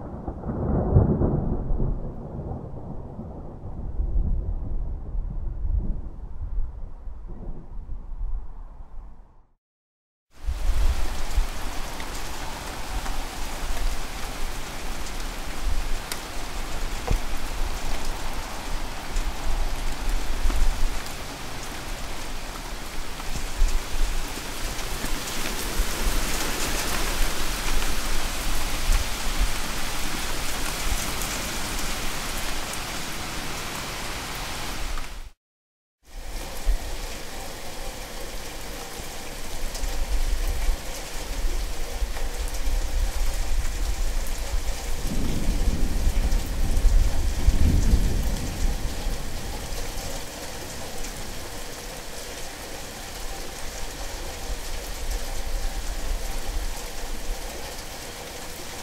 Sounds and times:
Rain on surface: 0:00.0 - 0:04.3, 0:10.3 - 0:35.4, 0:36.1 - 0:58.8.

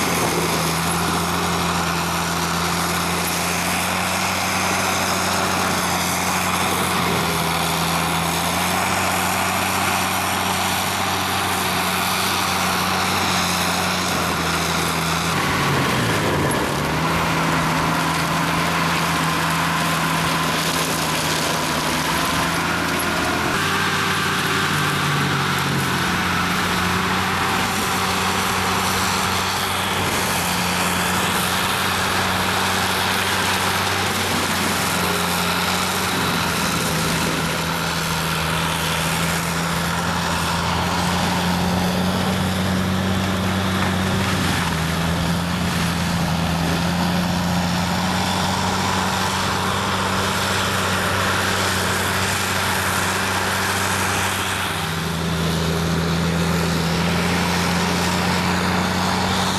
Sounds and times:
Outside, rural or natural: 0:00.0 - 0:59.5
Vehicle: 0:00.0 - 0:59.5.

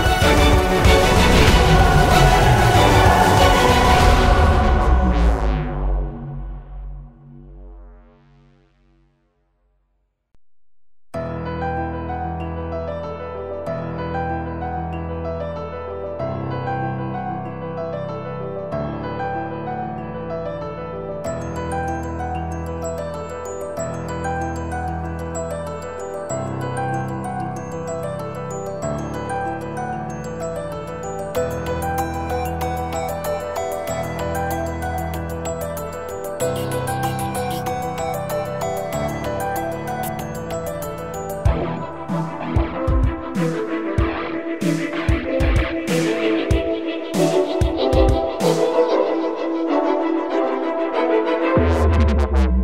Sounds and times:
Music: 0:00.0 - 0:10.4, 0:11.1 - 0:52.6.

